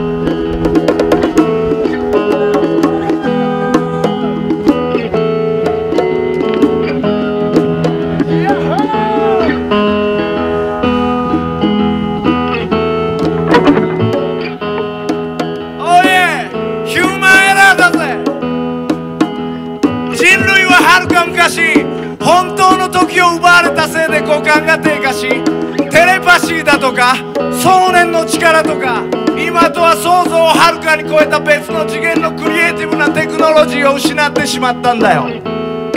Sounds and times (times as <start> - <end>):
Music: 0.0 - 35.9.